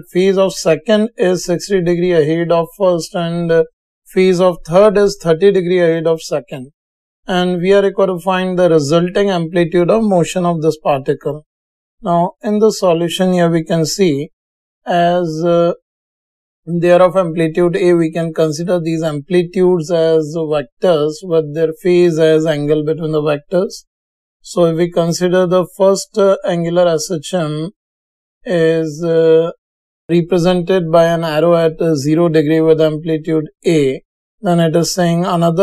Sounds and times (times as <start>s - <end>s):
Speech: 0.0s - 6.7s, 7.3s - 14.3s, 14.9s - 15.8s, 16.7s - 27.8s, 28.5s - 35.6s.